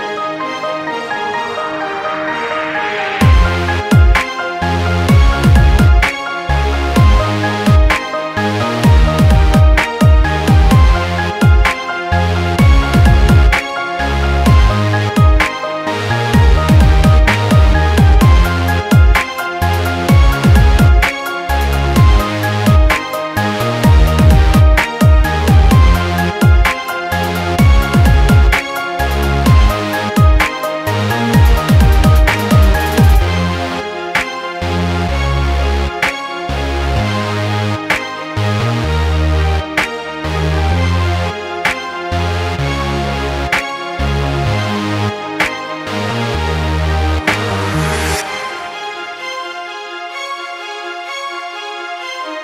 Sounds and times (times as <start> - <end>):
Music: 0.0 - 52.4.